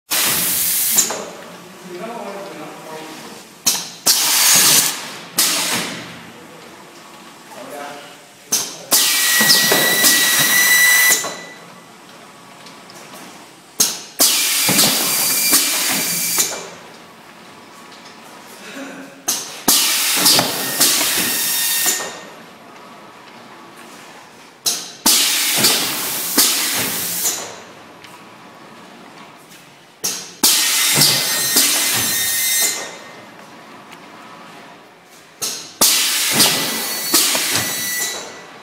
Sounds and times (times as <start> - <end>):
Speech: 1.1 - 3.5, 7.5 - 8.9.